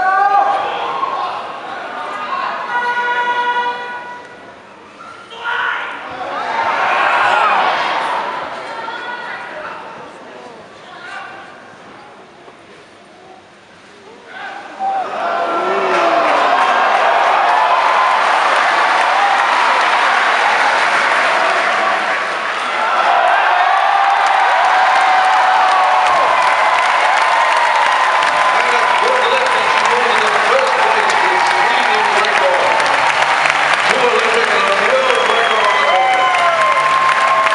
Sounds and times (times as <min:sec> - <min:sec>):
Speech: 0:28.6 - 0:32.9, 0:33.9 - 0:36.4.